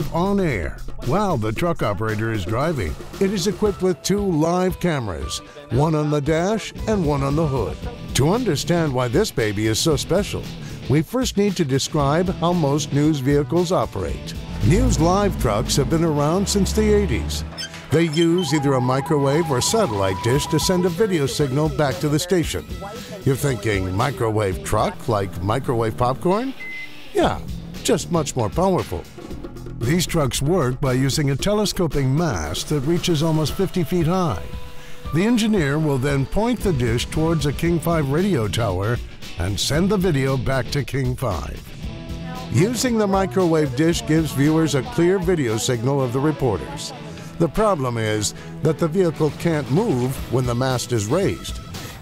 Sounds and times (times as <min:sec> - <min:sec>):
Speech: 0:00.0 - 0:26.6, 0:27.2 - 0:29.1, 0:29.8 - 0:34.4, 0:35.1 - 0:41.7, 0:42.3 - 0:51.6
Music: 0:00.0 - 0:52.0.